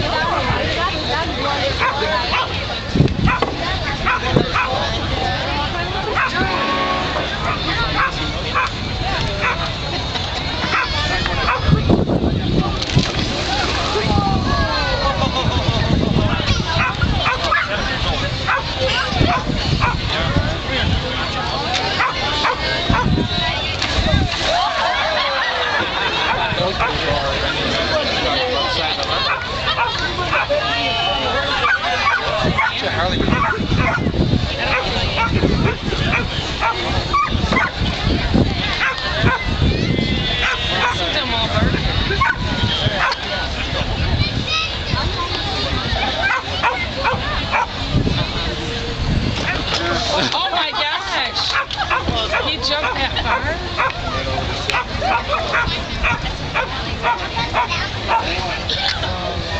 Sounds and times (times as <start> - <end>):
Speech: 0.0 - 59.5
Bow-wow: 7.4 - 8.7, 10.7 - 11.7, 31.6 - 34.1, 38.8 - 39.5, 40.4 - 41.0, 42.2 - 42.4, 54.7 - 58.3.